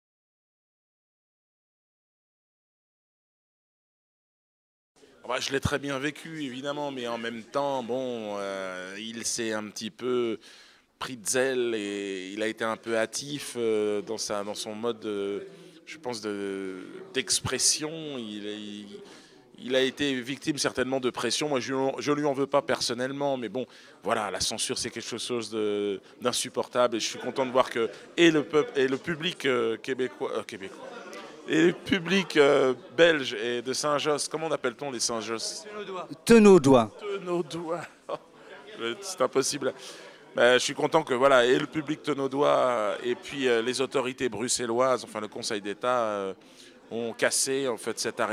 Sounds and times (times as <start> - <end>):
Speech: 5.1 - 10.4, 11.0 - 48.3.